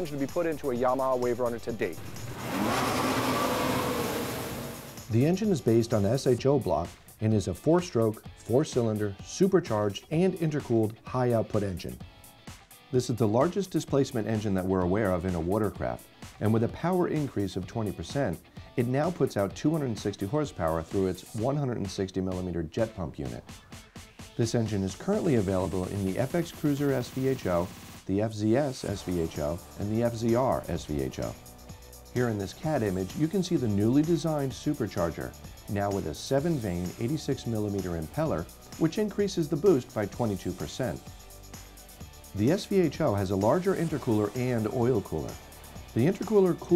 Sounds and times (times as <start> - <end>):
Speech: 0.0 - 2.0, 5.1 - 12.0, 12.9 - 23.5, 24.4 - 31.4, 32.2 - 41.0, 42.4 - 45.4, 46.0 - 46.7
Music: 0.0 - 46.7.